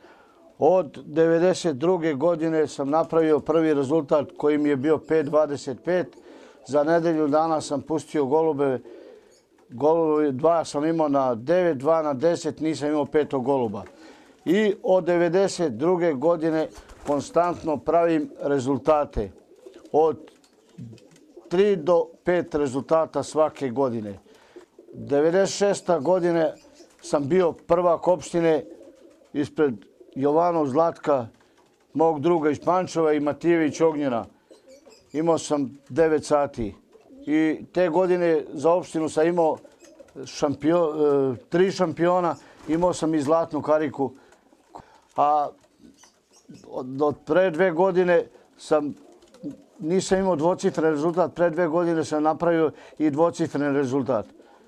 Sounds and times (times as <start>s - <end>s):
Speech: 0.6s - 8.8s, 9.7s - 19.3s, 19.9s - 20.2s, 20.8s - 24.2s, 25.0s - 28.7s, 29.4s - 31.4s, 32.0s - 34.3s, 35.2s - 39.6s, 40.2s - 44.2s, 45.2s - 45.6s, 46.5s - 54.3s.